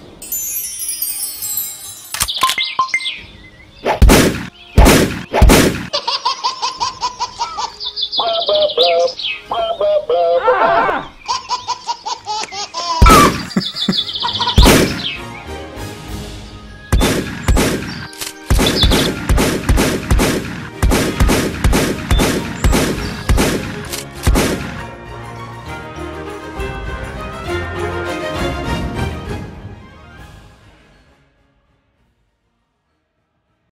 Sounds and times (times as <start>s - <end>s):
Music: 0.0s - 3.8s, 7.0s - 10.6s, 13.0s - 33.7s.